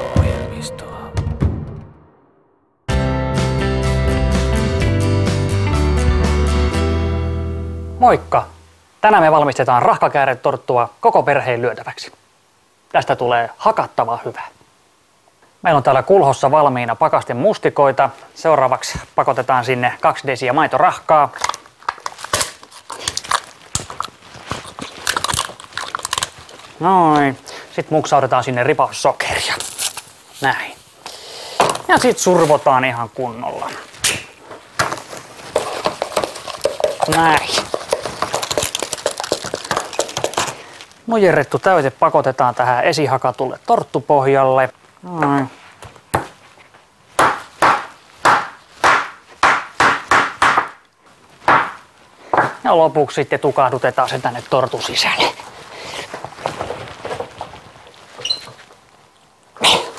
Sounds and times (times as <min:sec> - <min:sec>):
Speech: 0:00.0 - 0:01.2, 0:08.0 - 0:12.2, 0:12.9 - 0:14.6, 0:15.6 - 0:21.5, 0:26.8 - 0:29.7, 0:30.4 - 0:30.8, 0:31.9 - 0:33.9, 0:37.0 - 0:37.7, 0:41.1 - 0:45.6, 0:52.6 - 0:55.4.